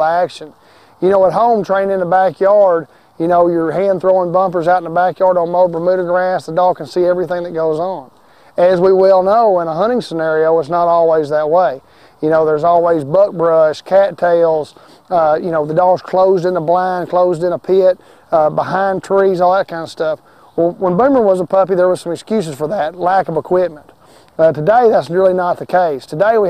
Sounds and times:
Speech: 0.0 - 26.4.

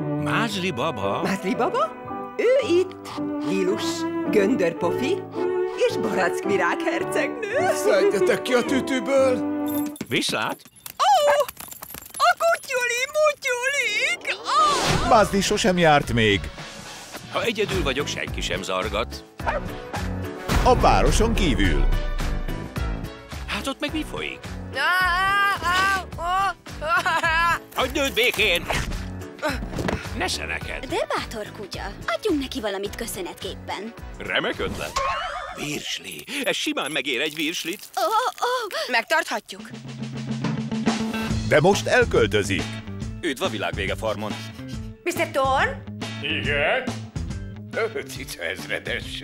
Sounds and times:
Music: 0.0 - 10.5, 14.8 - 37.3, 39.1 - 49.2
Yip: 19.4 - 19.7.

